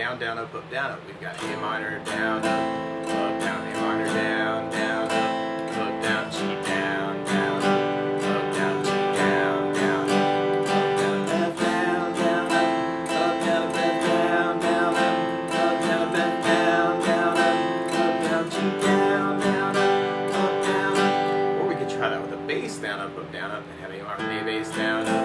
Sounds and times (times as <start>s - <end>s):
Strum: 0.0s - 25.2s.